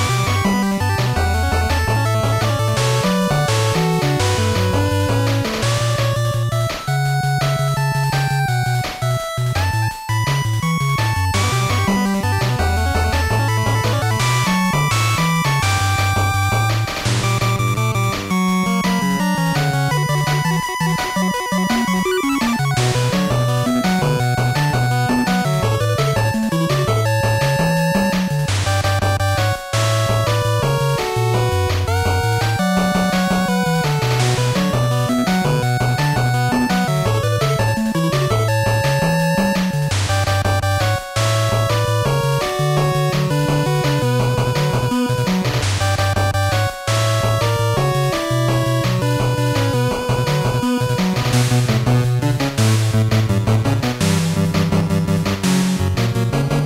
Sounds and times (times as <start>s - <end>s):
Music: 0.0s - 56.6s.